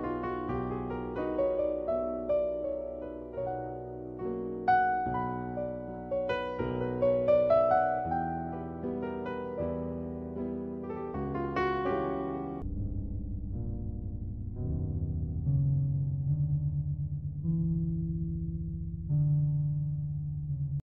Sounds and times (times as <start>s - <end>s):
Music: 0.0s - 20.8s.